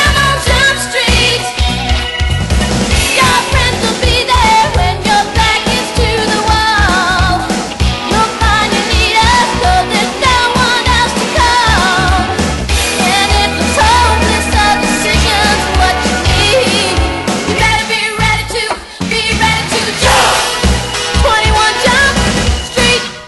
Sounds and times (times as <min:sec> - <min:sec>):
Exciting music: 0:00.0 - 0:23.2.